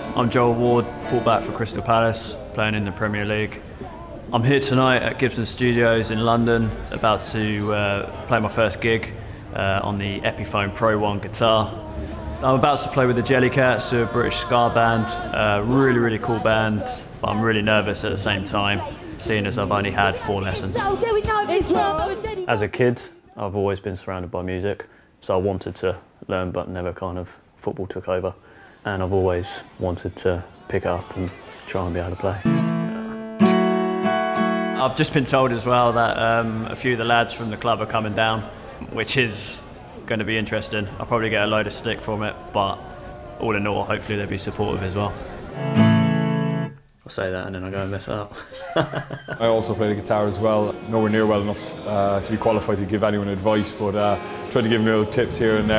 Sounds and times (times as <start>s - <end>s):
Speech: 0.2s - 32.5s, 49.4s - 55.7s.